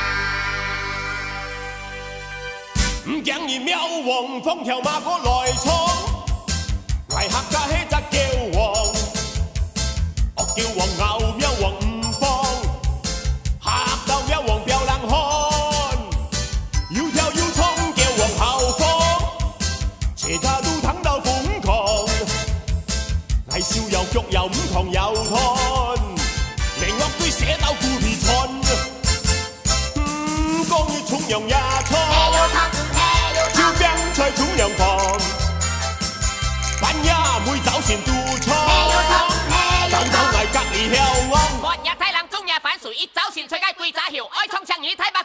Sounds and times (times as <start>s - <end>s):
Music: 0.0s - 42.0s.